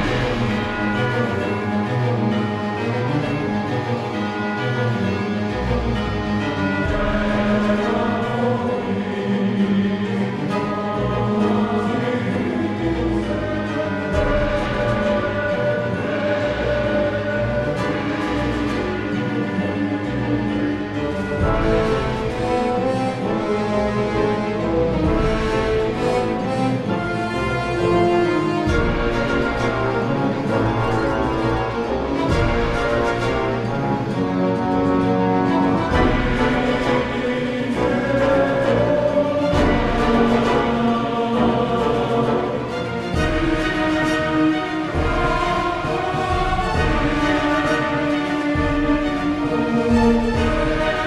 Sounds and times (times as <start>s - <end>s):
Music: 0.0s - 51.0s.